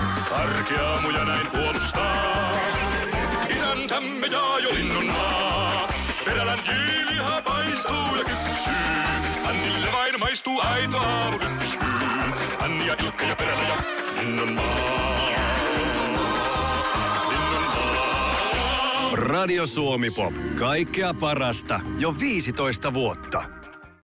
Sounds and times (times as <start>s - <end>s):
Music: 0.0s - 24.0s
Speech: 19.1s - 23.5s.